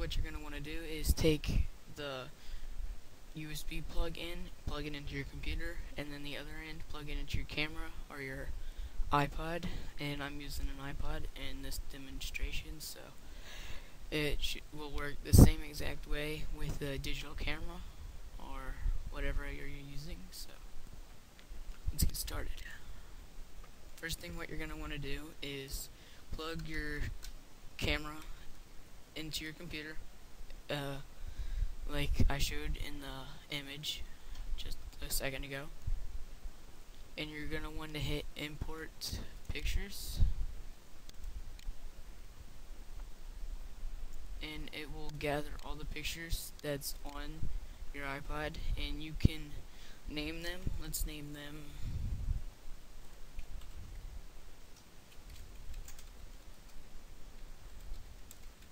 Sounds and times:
Speech: 0:00.0 - 0:02.4, 0:03.4 - 0:13.2, 0:14.1 - 0:20.6, 0:21.9 - 0:22.9, 0:24.0 - 0:27.2, 0:27.8 - 0:28.4, 0:29.2 - 0:30.0, 0:30.6 - 0:31.1, 0:31.9 - 0:35.8, 0:37.2 - 0:40.4, 0:44.4 - 0:51.8.

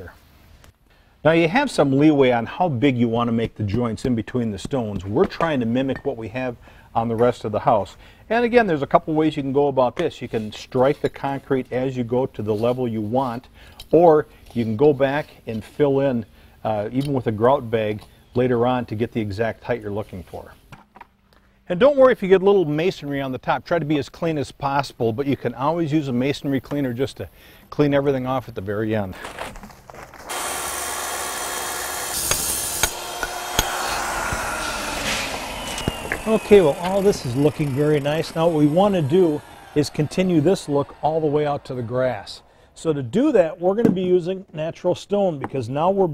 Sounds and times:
Speech: 0:00.0 - 0:00.2, 0:01.3 - 0:20.6, 0:21.7 - 0:29.2, 0:36.3 - 0:46.1.

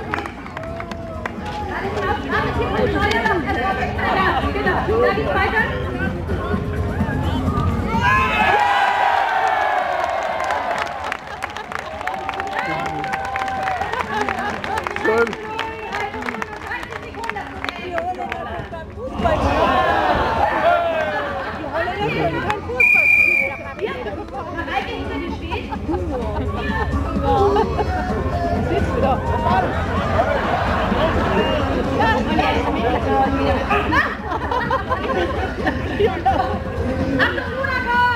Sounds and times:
Cheering: 0:00.0 - 0:02.0, 0:06.9 - 0:17.2, 0:19.2 - 0:22.2, 0:26.7 - 0:32.0
Crowd: 0:00.0 - 0:38.1.

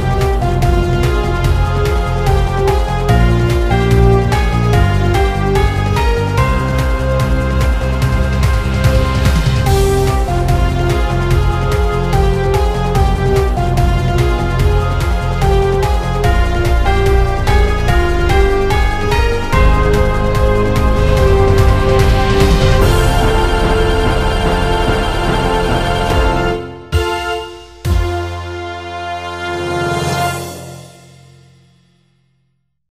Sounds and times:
Sound effect: 0:00.0 - 0:28.6
Music: 0:00.0 - 0:32.8.

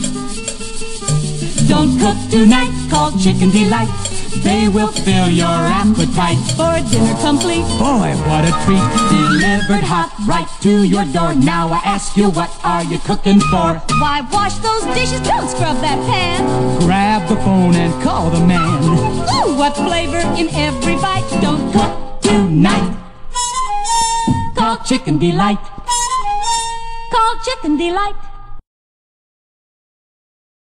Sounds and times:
Music: 0:00.0 - 0:28.6.

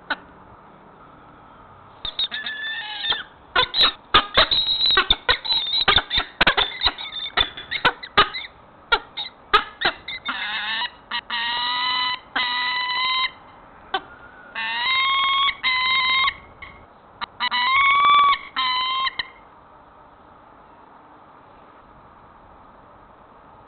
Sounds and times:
Bird: 0:02.1 - 0:19.4.

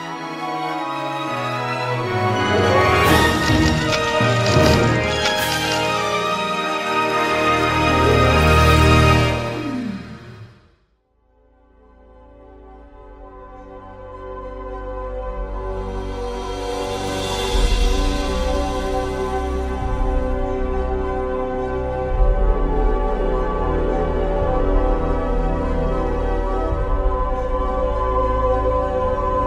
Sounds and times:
Music: 0:00.0 - 0:29.4.

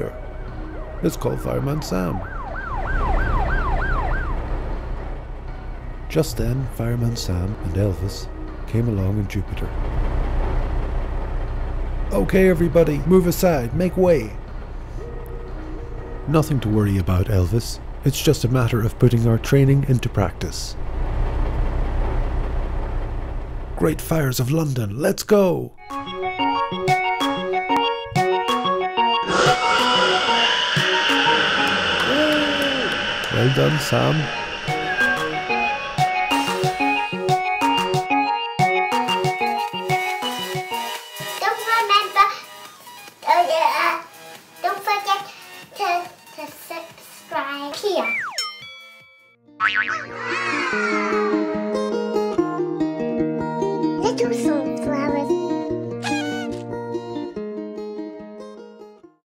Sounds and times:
Music: 0:00.0 - 0:09.6, 0:12.1 - 0:20.1, 0:25.8 - 0:59.2.

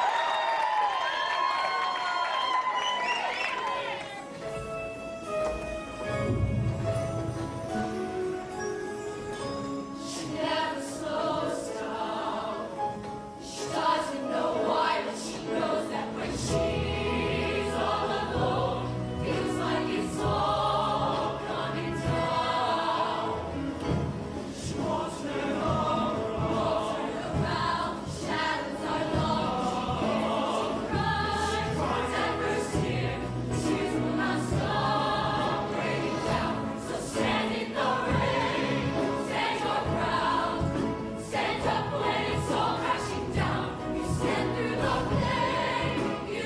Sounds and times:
Music: 0:00.0 - 0:46.4.

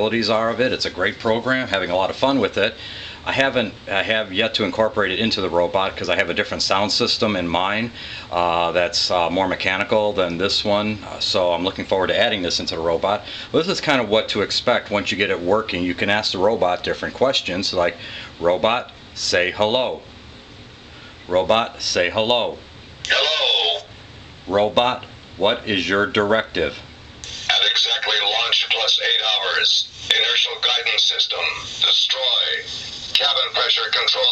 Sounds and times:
Speech: 0:00.0 - 0:20.1, 0:21.3 - 0:23.9, 0:24.5 - 0:34.3.

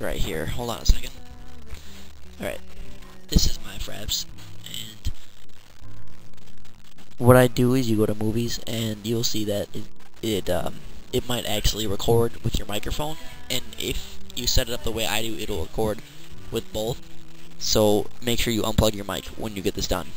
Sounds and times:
Speech: 0:00.0 - 0:01.3, 0:02.4 - 0:05.2, 0:07.2 - 0:17.0, 0:17.6 - 0:20.1
Music: 0:00.0 - 0:20.1.

